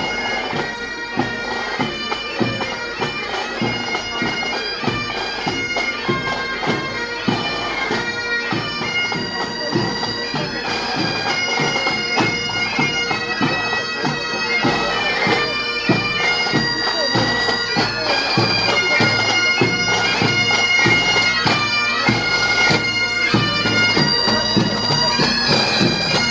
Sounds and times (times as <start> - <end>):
Bagpipes: 0.0 - 26.3
Wind instrument, woodwind instrument: 0.0 - 26.3.